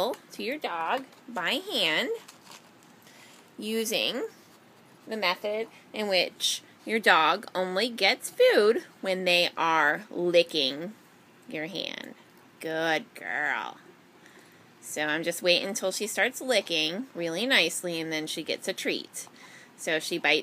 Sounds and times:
Speech: 0.0 - 2.2, 3.6 - 4.4, 5.1 - 13.8, 14.8 - 20.4.

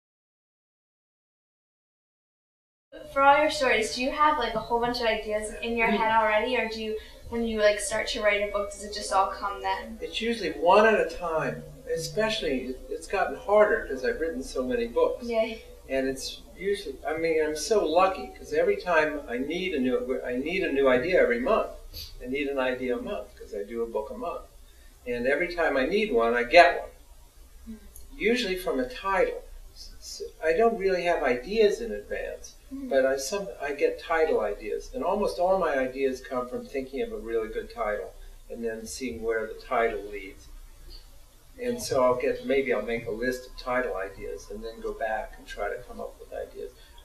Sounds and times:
Speech: 3.0 - 24.4, 25.1 - 26.9, 27.7 - 40.4, 41.6 - 46.7.

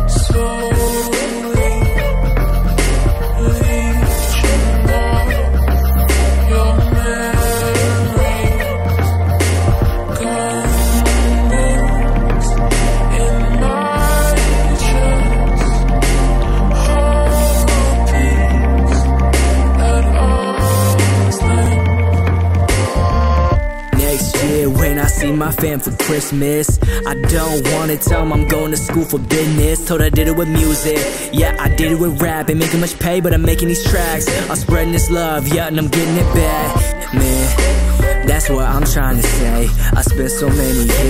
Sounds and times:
Hip hop music: 0.0 - 41.0.

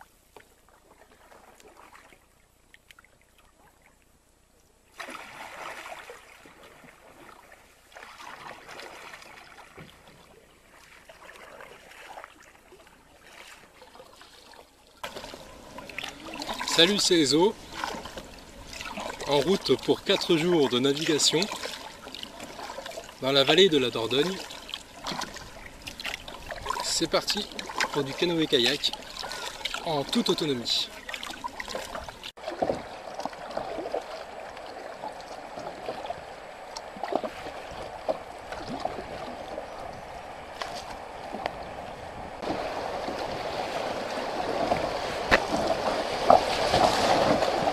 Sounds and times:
Rowboat, canoe, kayak: 0.0 - 47.7
Speech: 16.4 - 17.6, 19.2 - 21.6, 23.2 - 24.5, 26.8 - 29.0, 29.8 - 31.0.

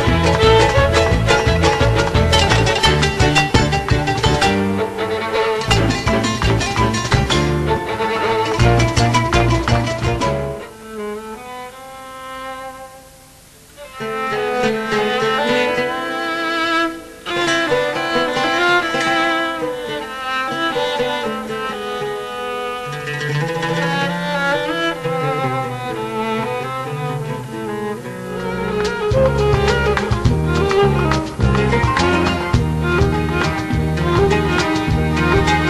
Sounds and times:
Classical music: 0.0 - 35.6.

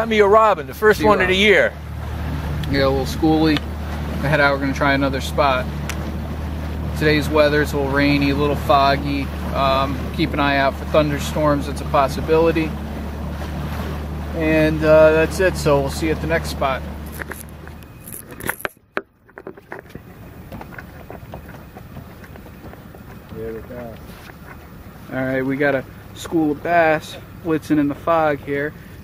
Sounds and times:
Speech: 0.0 - 1.8, 2.7 - 3.6, 7.0 - 12.7, 14.4 - 16.8, 25.1 - 28.7.

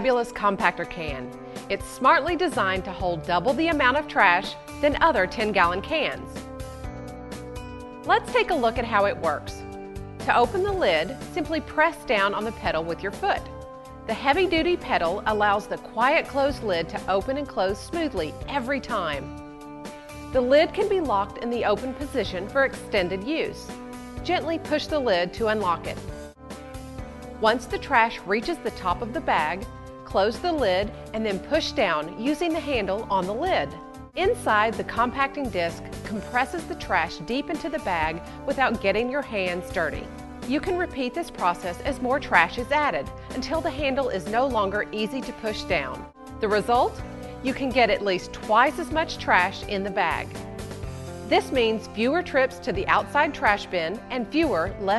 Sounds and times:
Speech: 0.0 - 6.2, 8.1 - 9.6, 10.3 - 13.4, 14.1 - 19.3, 20.4 - 26.0, 27.4 - 50.3, 51.3 - 54.9
Music: 0.0 - 54.9.

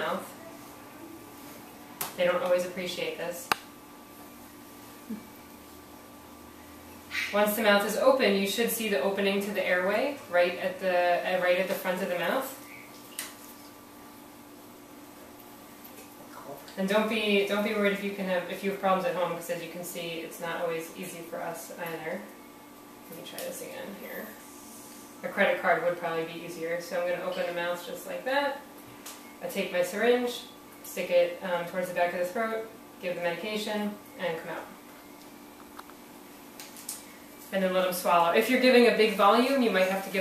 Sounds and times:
Inside, small room: 0.0 - 40.2
Speech: 7.3 - 12.6, 16.4 - 22.3, 23.1 - 24.4, 25.2 - 28.6, 29.4 - 34.8, 37.5 - 40.2.

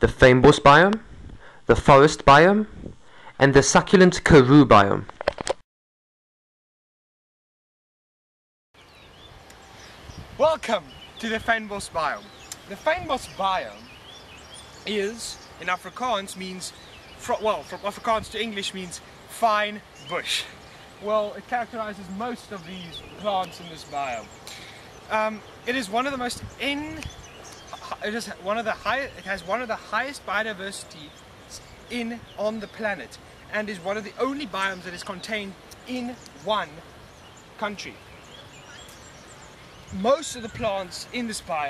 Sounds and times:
Speech: 0.0 - 1.0, 1.7 - 2.7, 3.4 - 5.1, 10.4 - 13.9, 14.8 - 24.3, 25.1 - 27.1, 27.8 - 36.8, 37.6 - 38.0, 39.9 - 41.6.

